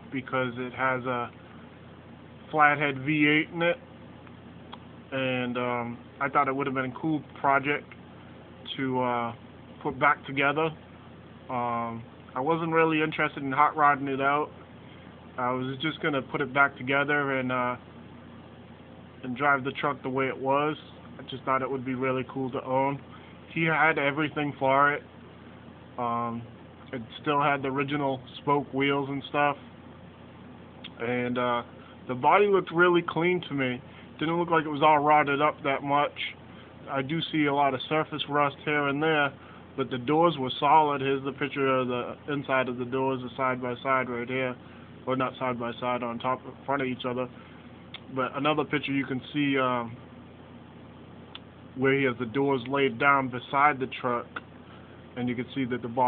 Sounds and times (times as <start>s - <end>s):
Speech: 0.0s - 1.4s, 2.5s - 3.8s, 5.1s - 8.0s, 8.6s - 10.8s, 11.5s - 14.6s, 15.4s - 17.9s, 19.2s - 25.1s, 26.0s - 29.6s, 30.9s - 47.4s, 48.0s - 50.0s, 51.4s - 54.4s, 55.2s - 56.0s.